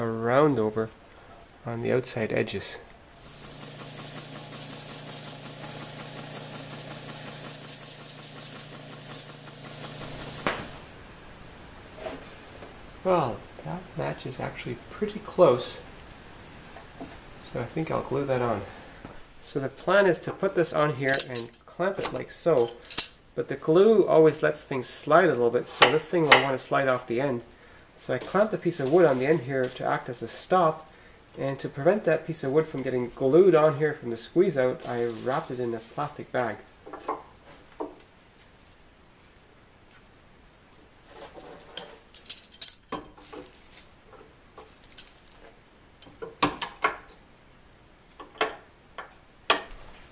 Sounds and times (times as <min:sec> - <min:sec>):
Speech: 0:00.0 - 0:01.0, 0:01.6 - 0:02.9, 0:13.0 - 0:15.9, 0:17.4 - 0:18.8, 0:19.4 - 0:22.8, 0:23.4 - 0:36.7.